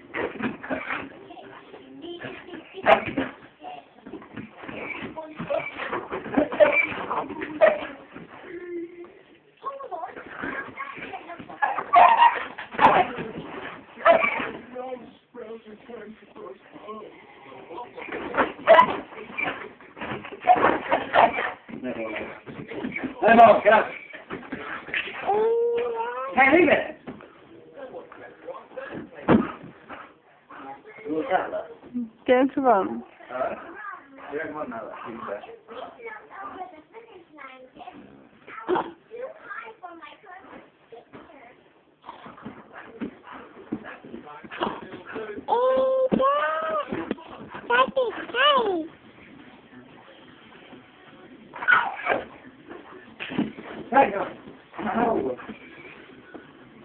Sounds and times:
Yip: 11.6 - 13.0, 14.0 - 14.5, 18.7 - 19.5, 51.6 - 52.2.

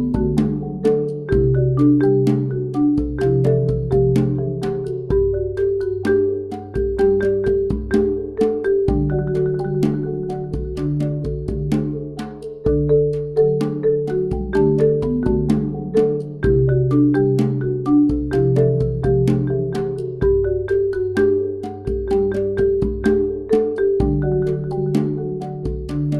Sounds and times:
Marimba, xylophone: 0.0 - 26.2.

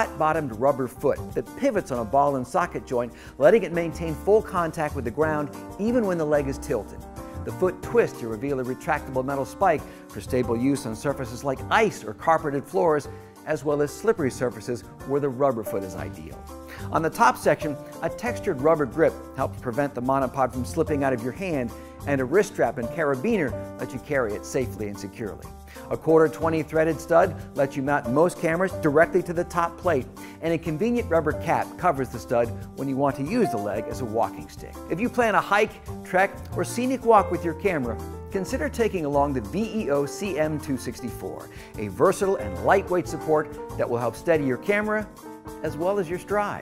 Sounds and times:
Speech: 0.0 - 46.6.

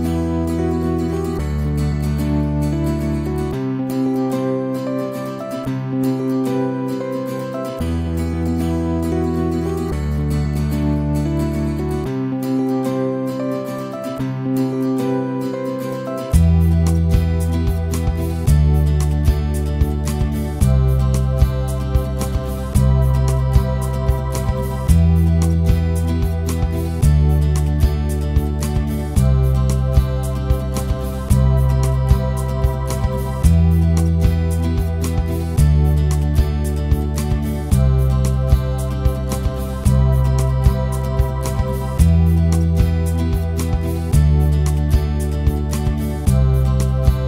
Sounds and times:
Music: 0.0 - 47.2.

